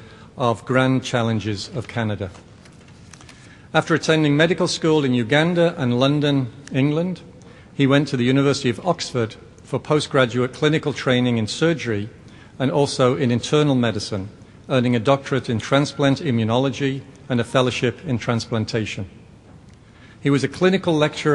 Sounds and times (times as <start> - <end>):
Narration, monologue: 0.0 - 21.3
Male speech, man speaking: 0.4 - 2.4, 3.8 - 19.1, 20.2 - 21.3.